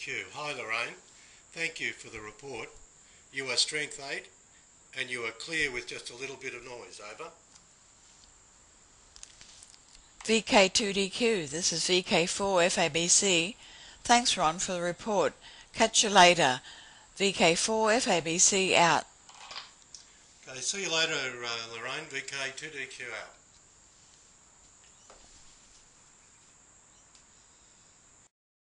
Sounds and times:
Narration, monologue: 0.0 - 7.7, 9.6 - 23.5.

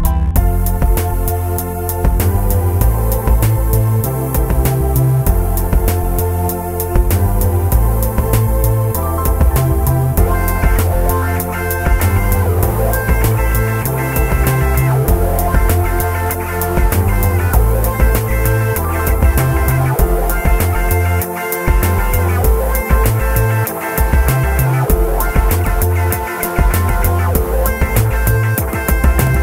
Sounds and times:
Music: 0.0 - 29.4.

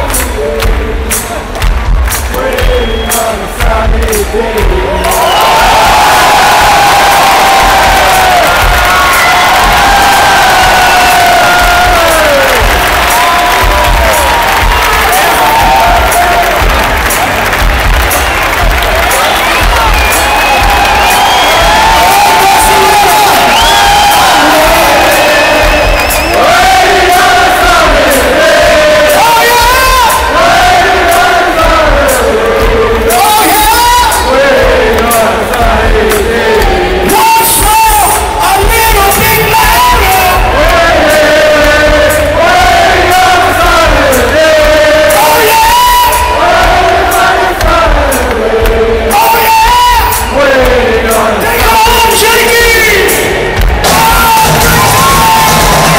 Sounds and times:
Singing: 0.0 - 17.1, 18.4 - 55.9
Crowd: 0.0 - 55.9
Music: 0.0 - 55.9.

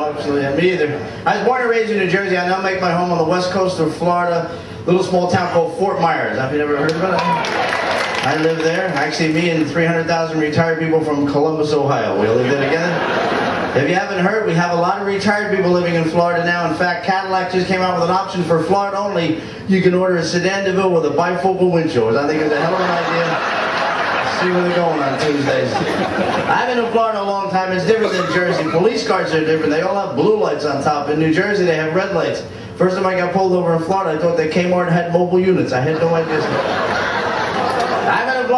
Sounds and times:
Speech: 0.0 - 7.4, 8.3 - 13.0, 13.8 - 23.5, 24.3 - 25.8, 26.5 - 36.6, 38.1 - 38.5.

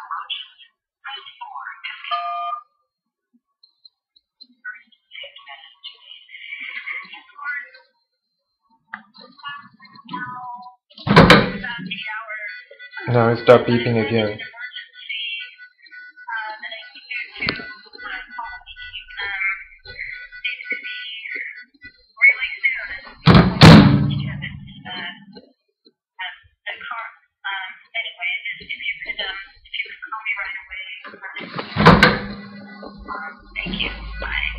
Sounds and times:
Speech: 0.0 - 2.6, 4.5 - 7.9, 9.0 - 23.3, 24.0 - 25.5, 26.2 - 31.8, 32.6 - 34.5.

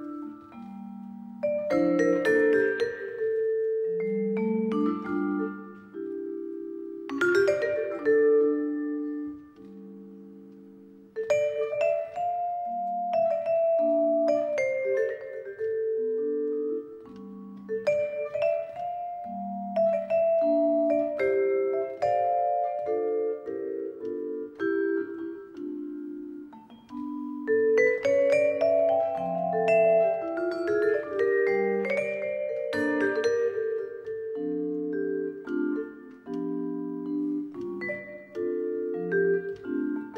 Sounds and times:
Marimba, xylophone: 0.0 - 40.1.

